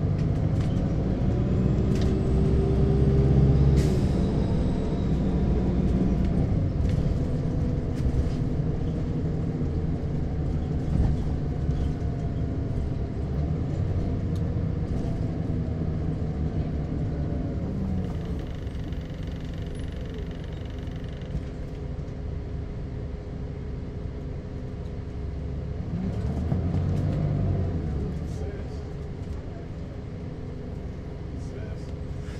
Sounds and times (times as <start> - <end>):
Bus: 0.0 - 32.3.